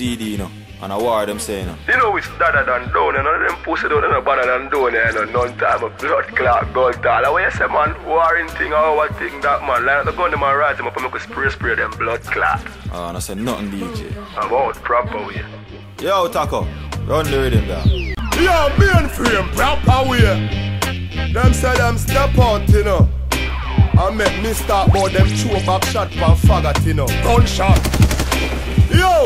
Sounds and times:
Speech: 0.0 - 20.4, 21.4 - 23.1, 24.0 - 27.8, 28.9 - 29.2
Music: 0.0 - 29.2.

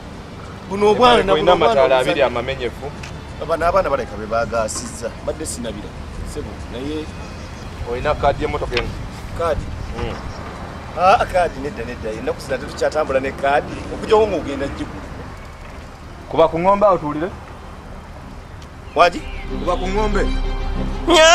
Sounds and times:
Speech: 0.7 - 7.1.

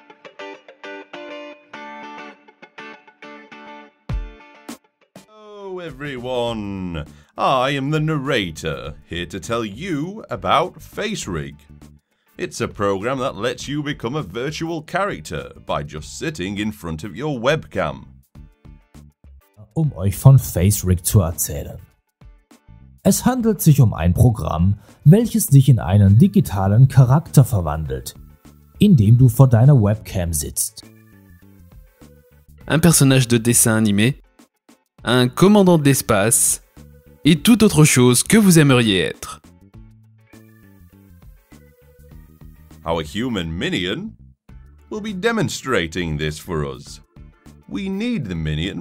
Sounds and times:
Music: 0.0 - 48.8
Speech: 5.3 - 11.6, 12.4 - 18.1, 19.6 - 21.9, 23.1 - 28.2, 28.8 - 30.9, 32.7 - 34.2, 35.1 - 36.6, 37.3 - 39.4, 42.8 - 44.2, 44.9 - 47.0, 47.7 - 48.8.

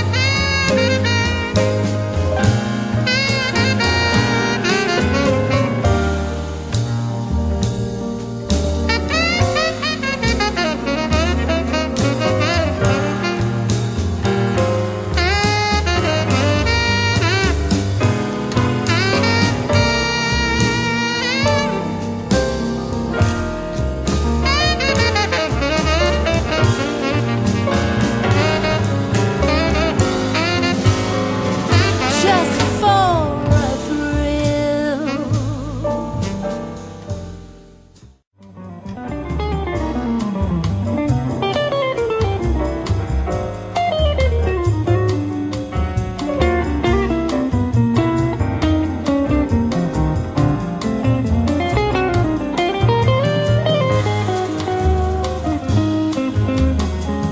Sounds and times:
Musical instrument: 8.8 - 37.4.

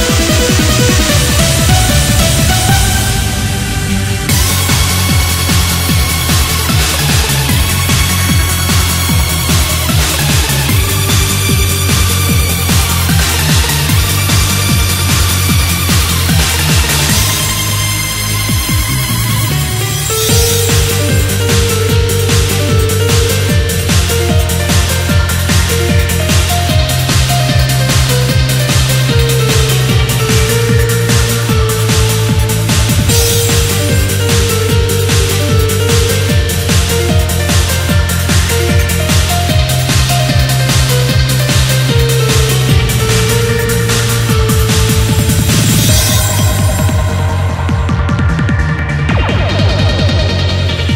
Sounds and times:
Music: 0.0 - 50.9.

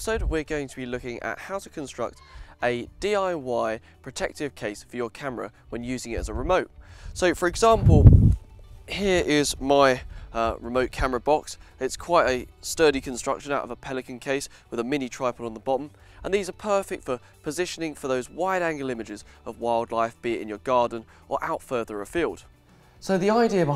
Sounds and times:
Speech: 0.0 - 8.0, 8.9 - 22.4, 23.0 - 23.7
Music: 0.0 - 23.7.

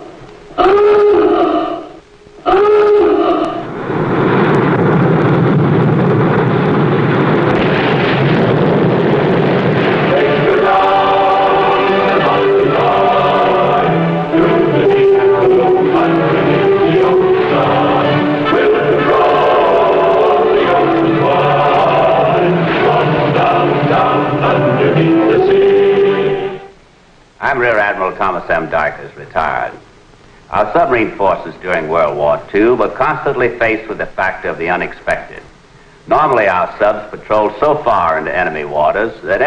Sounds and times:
Speech: 27.4 - 29.8, 30.5 - 35.5, 36.1 - 39.4.

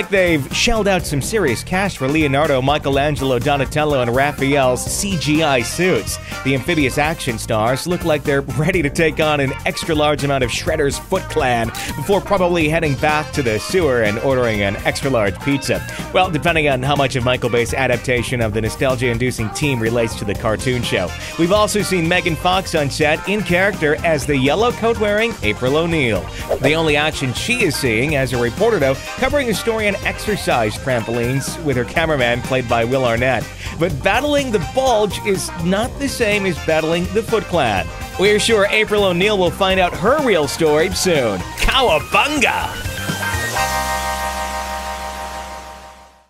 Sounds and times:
Speech: 0.0 - 42.8
Music: 0.0 - 46.2.

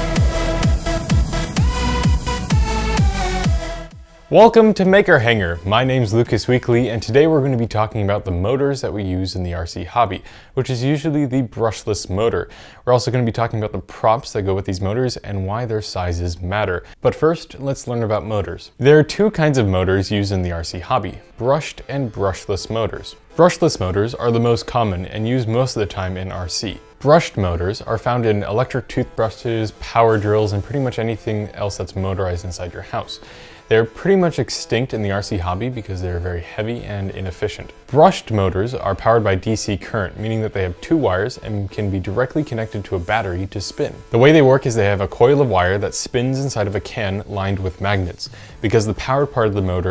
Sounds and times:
Speech: 4.3 - 49.9.

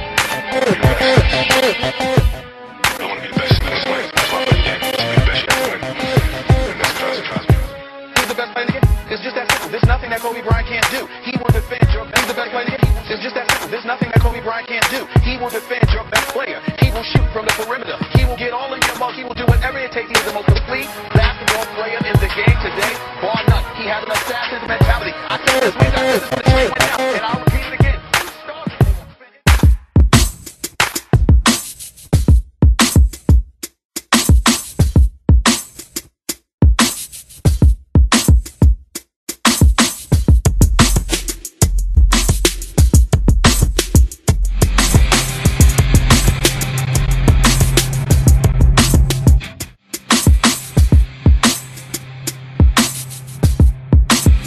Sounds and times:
Music: 0.0 - 54.4.

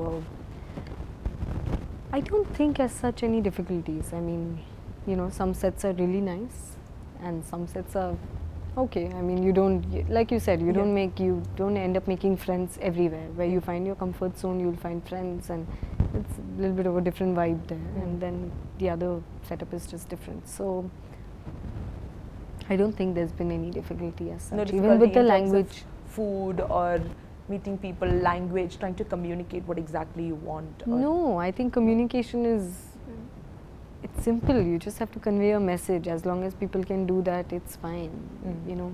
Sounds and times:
Speech: 2.2 - 8.2, 8.8 - 20.9, 22.6 - 33.3, 34.1 - 38.9.

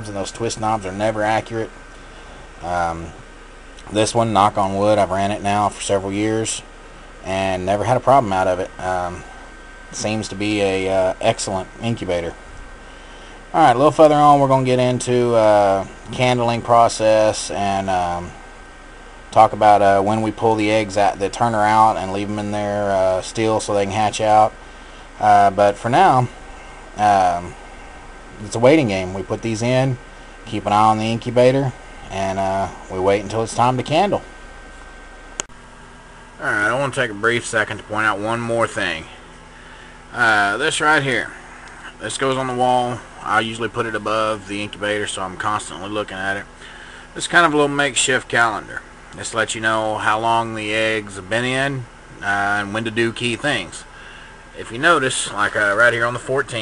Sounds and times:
Speech: 0.0 - 1.8, 2.6 - 9.3, 9.9 - 12.4, 13.5 - 18.4, 19.3 - 24.6, 25.2 - 26.4, 27.0 - 27.6, 28.4 - 34.3, 36.4 - 39.2, 40.1 - 46.5, 47.2 - 53.9, 54.6 - 56.6.

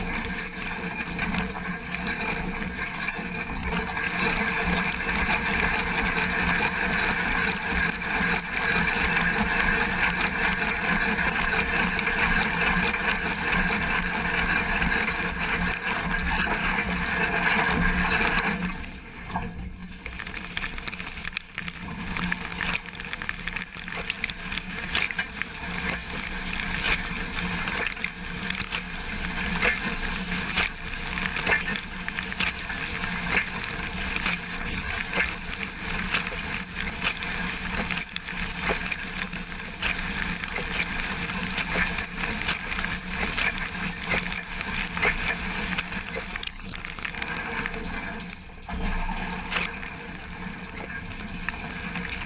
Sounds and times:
Water: 0.0 - 52.2.

